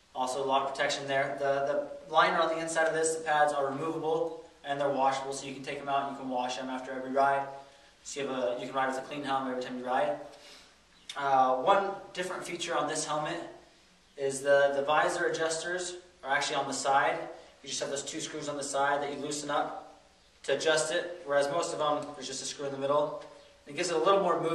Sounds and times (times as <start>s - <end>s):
Speech: 0.2s - 10.3s, 11.1s - 13.6s, 14.2s - 24.5s.